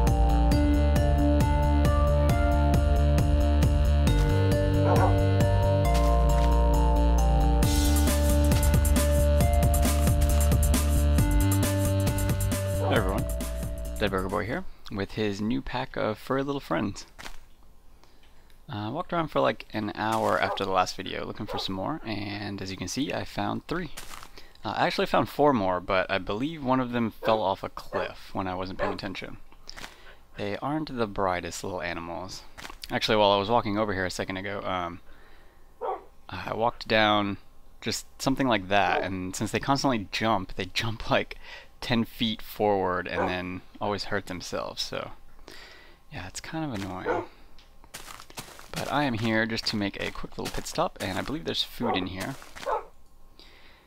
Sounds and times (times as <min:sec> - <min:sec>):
Speech: 0:12.8 - 0:13.3, 0:14.0 - 0:17.1, 0:18.7 - 0:24.0, 0:24.6 - 0:29.4, 0:30.4 - 0:35.0, 0:36.3 - 0:45.2, 0:46.1 - 0:47.3, 0:48.7 - 0:52.4.